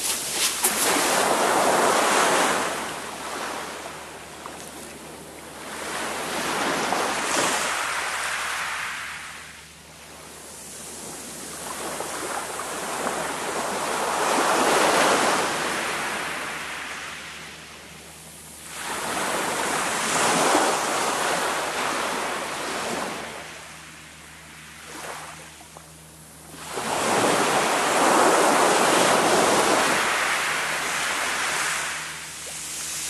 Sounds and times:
Ocean: 0:00.0 - 0:33.0
Outside, rural or natural: 0:00.0 - 0:33.0.

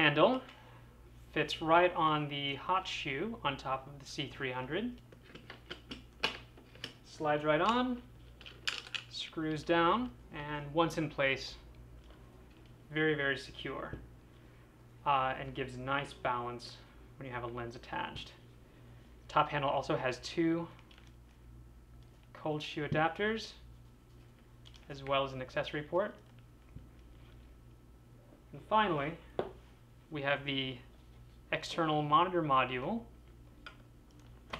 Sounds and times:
Speech: 0:00.0 - 0:00.5, 0:01.3 - 0:05.0, 0:07.1 - 0:08.1, 0:09.2 - 0:11.7, 0:12.9 - 0:14.0, 0:15.0 - 0:18.4, 0:19.3 - 0:20.8, 0:22.4 - 0:23.6, 0:24.9 - 0:26.2, 0:28.5 - 0:29.2, 0:30.1 - 0:30.9, 0:31.5 - 0:33.1.

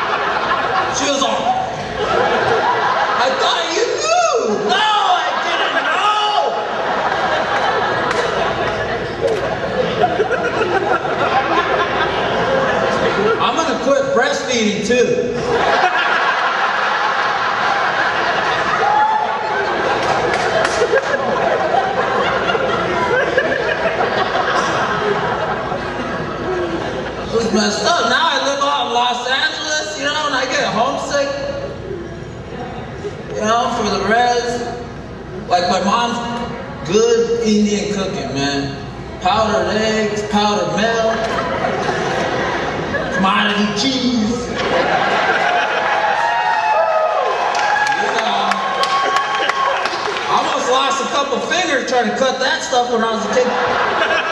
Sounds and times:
Inside, large room or hall: 0:00.0 - 0:54.3
Speech: 0:00.9 - 0:01.7, 0:03.2 - 0:06.6, 0:13.4 - 0:15.4, 0:27.3 - 0:31.6, 0:33.3 - 0:34.8, 0:35.5 - 0:41.3, 0:43.1 - 0:44.6, 0:50.3 - 0:53.6.

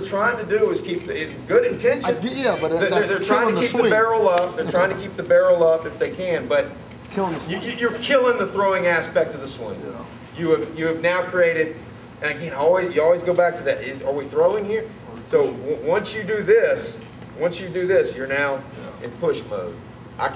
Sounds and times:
Speech: 0:00.0 - 0:20.3.

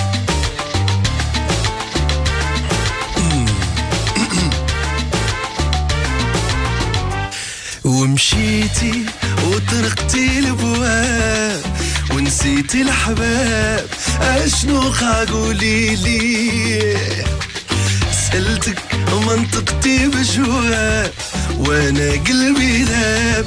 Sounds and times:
Music: 0:00.0 - 0:23.4.

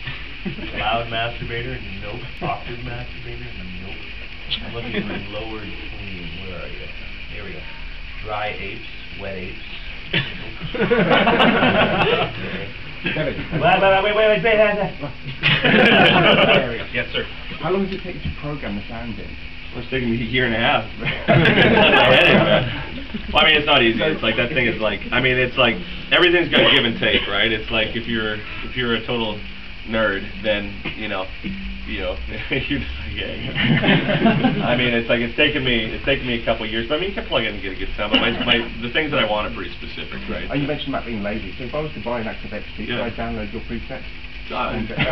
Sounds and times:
Speech: 0:00.7 - 0:09.8, 0:16.4 - 0:33.6, 0:34.6 - 0:45.1.

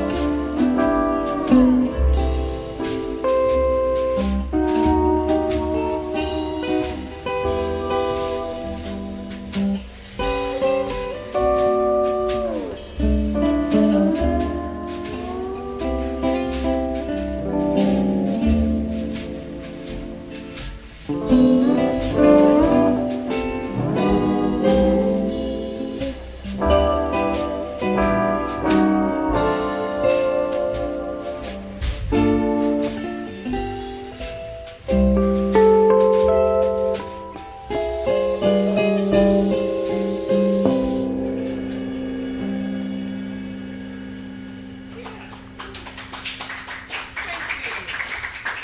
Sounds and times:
Guitar: 0:00.0 - 0:48.6.

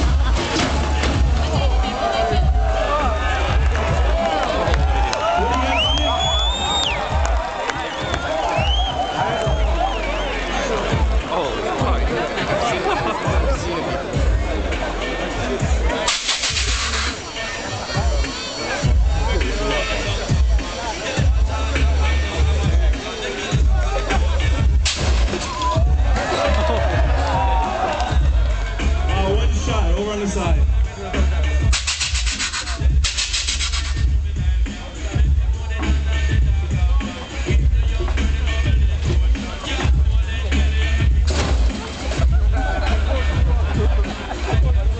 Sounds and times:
Speech: 0:09.4 - 0:16.1, 0:17.1 - 0:24.7, 0:28.8 - 0:31.7
Scratching (performance technique): 0:15.6 - 0:17.4, 0:31.2 - 0:45.0.

